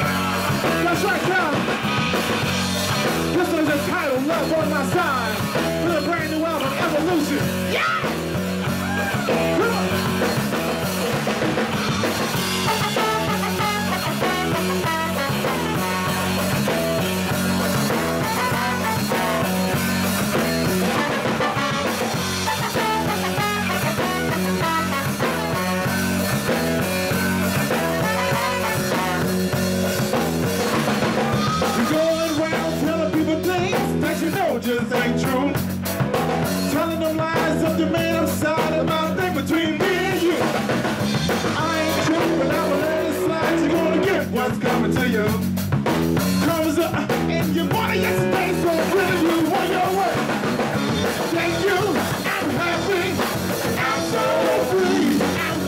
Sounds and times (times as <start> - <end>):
Jazz: 0.0 - 55.6.